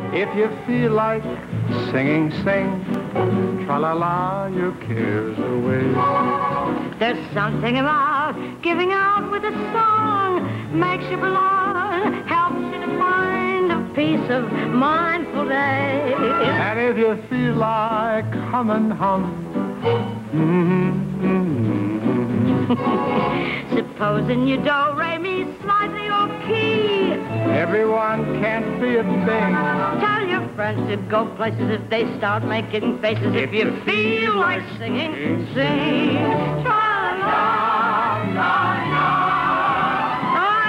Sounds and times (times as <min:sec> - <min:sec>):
Male singing: 0:00.0 - 0:03.0, 0:03.6 - 0:06.2, 0:15.6 - 0:19.6, 0:20.3 - 0:22.8, 0:27.4 - 0:29.9, 0:33.0 - 0:36.3
Music: 0:00.0 - 0:40.6
Female singing: 0:07.0 - 0:19.2, 0:23.7 - 0:38.2, 0:40.3 - 0:40.6.